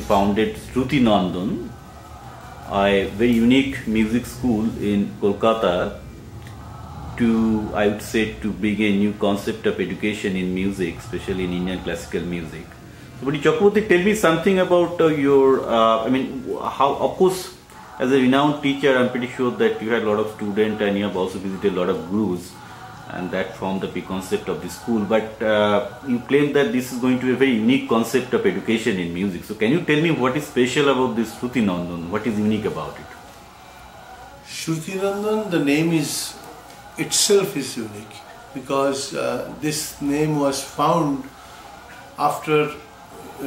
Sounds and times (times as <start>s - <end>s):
Speech: 0.0s - 43.4s.